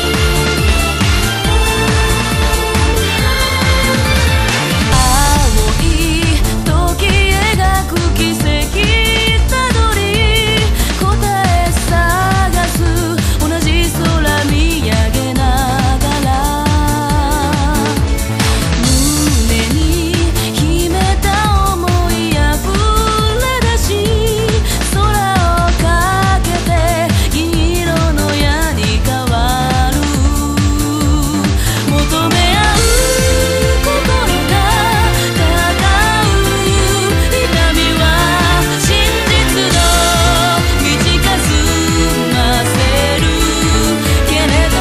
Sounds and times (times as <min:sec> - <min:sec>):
Music: 0:00.0 - 0:44.8.